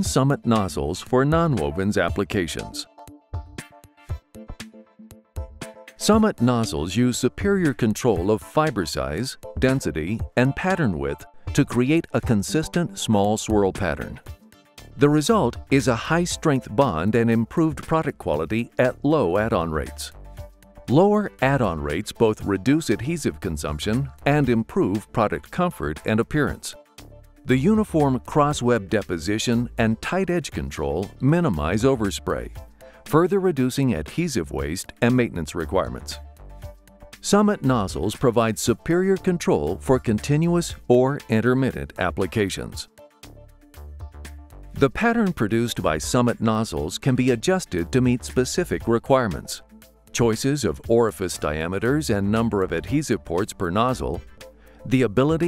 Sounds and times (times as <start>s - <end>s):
Speech: 0.0s - 2.9s, 6.0s - 14.2s, 15.0s - 20.2s, 20.9s - 26.8s, 27.5s - 36.2s, 37.2s - 42.9s, 44.8s - 49.6s, 50.2s - 54.2s, 54.9s - 55.4s
Music: 0.0s - 55.4s.